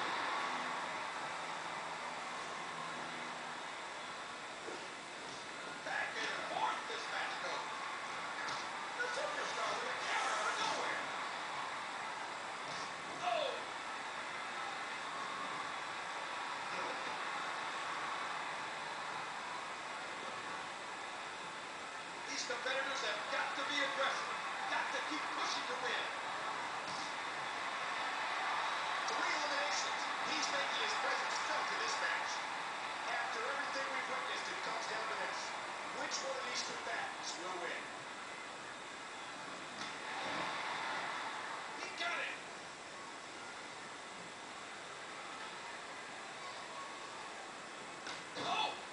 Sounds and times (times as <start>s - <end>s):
Speech: 33.1s - 37.9s.